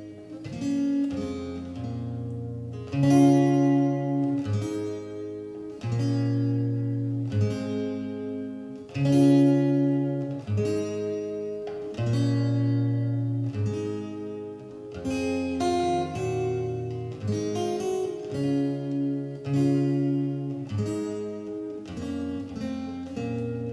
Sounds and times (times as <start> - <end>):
Acoustic guitar: 0.0 - 23.7
Strum: 0.0 - 23.7.